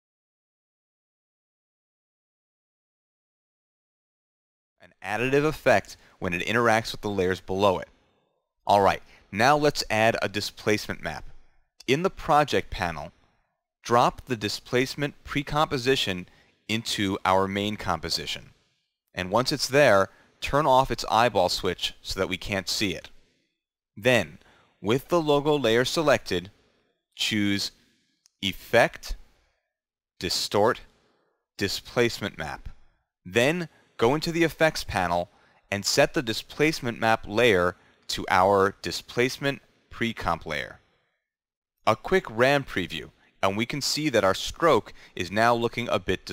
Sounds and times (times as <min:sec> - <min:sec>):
Speech: 0:04.8 - 0:07.9, 0:08.7 - 0:13.1, 0:13.8 - 0:18.5, 0:19.2 - 0:23.2, 0:24.0 - 0:26.5, 0:27.2 - 0:27.8, 0:28.4 - 0:29.2, 0:30.2 - 0:30.9, 0:31.6 - 0:40.8, 0:41.9 - 0:46.3.